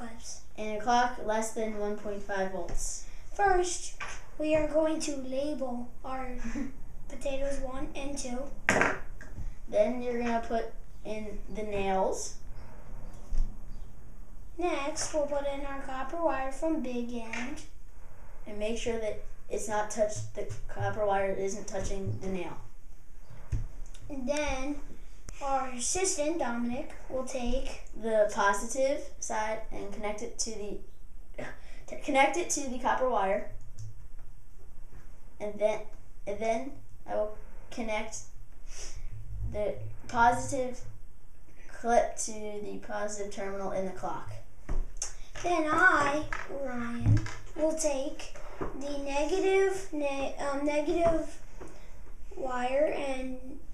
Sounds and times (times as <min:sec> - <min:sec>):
Speech: 0:00.0 - 0:08.5, 0:09.7 - 0:12.4, 0:14.6 - 0:17.7, 0:18.5 - 0:22.7, 0:24.1 - 0:30.8, 0:31.4 - 0:33.6, 0:35.4 - 0:38.3, 0:39.5 - 0:40.9, 0:41.7 - 0:44.4, 0:45.4 - 0:51.4, 0:52.4 - 0:53.6.